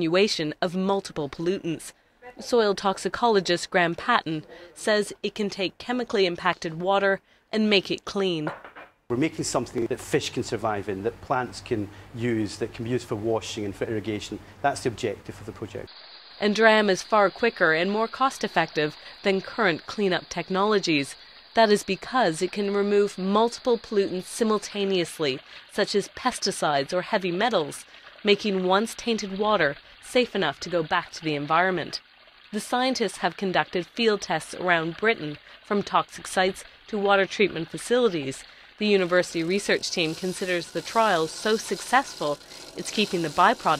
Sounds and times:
Speech: 0.0 - 8.5, 9.1 - 32.0, 32.6 - 43.7.

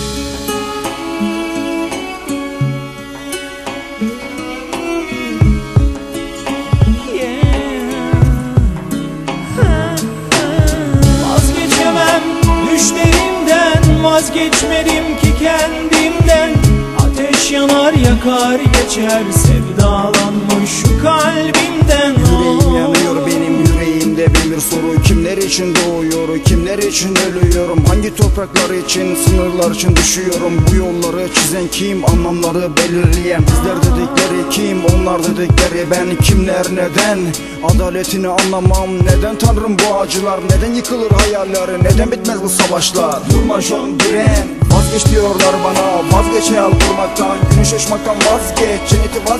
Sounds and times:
Music: 0.0 - 49.3.

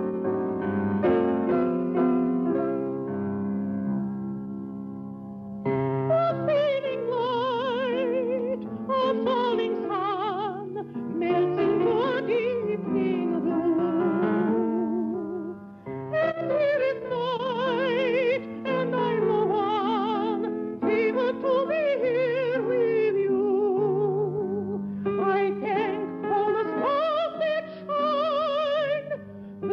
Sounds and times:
Music: 0.0 - 29.7
Female singing: 6.1 - 15.5, 16.2 - 29.7.

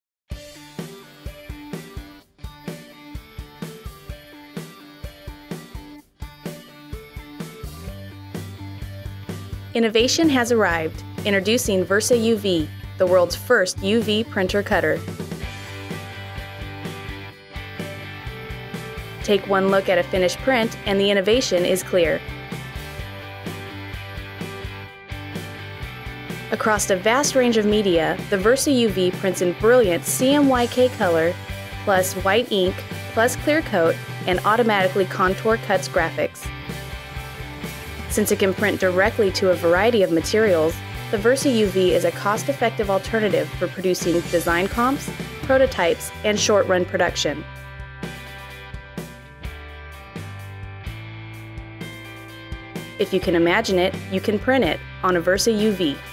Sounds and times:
Music: 0.3 - 56.1
Speech: 9.8 - 15.0, 19.2 - 22.2, 26.6 - 36.5, 38.1 - 47.4, 53.0 - 56.0.

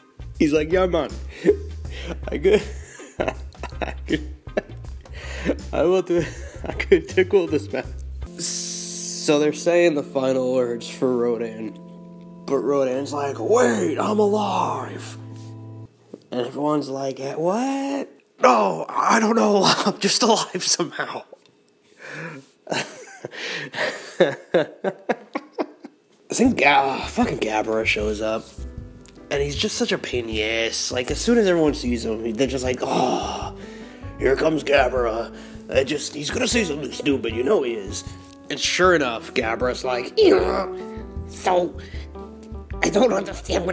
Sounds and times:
Speech: 0.4 - 1.2, 5.7 - 6.3, 6.9 - 7.8, 8.4 - 11.8, 12.5 - 15.2, 16.3 - 21.4, 26.3 - 28.5, 29.3 - 33.4, 34.2 - 40.7, 41.4 - 41.8, 42.8 - 43.7.

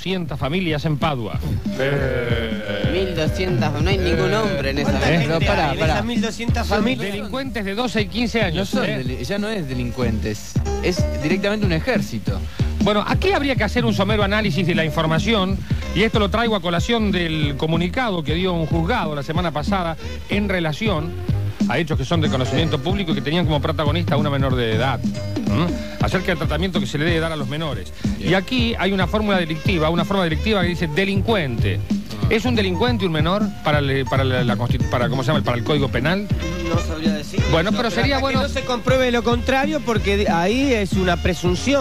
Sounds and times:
Music: 0.0 - 41.8
Speech: 0.0 - 41.8.

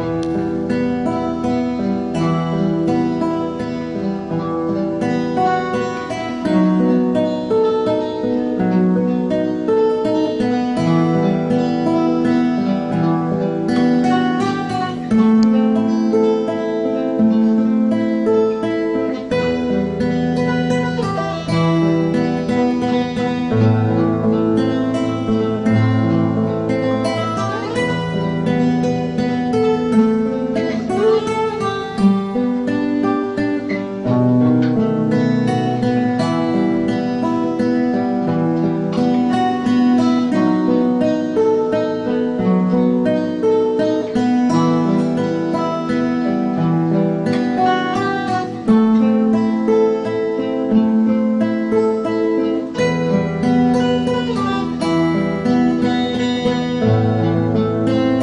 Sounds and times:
Acoustic guitar: 0.0 - 58.2.

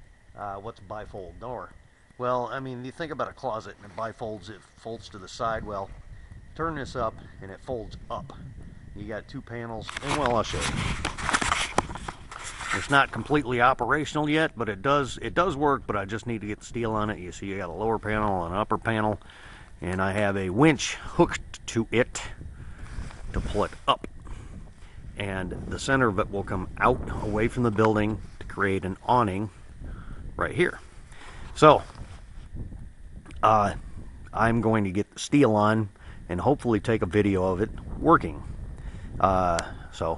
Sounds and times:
Speech: 0.4 - 6.0, 6.6 - 8.4, 9.0 - 10.8, 12.7 - 19.2, 19.8 - 22.4, 23.3 - 24.1, 25.2 - 29.6, 30.4 - 30.9, 31.6 - 32.0, 33.3 - 38.5, 39.2 - 40.1.

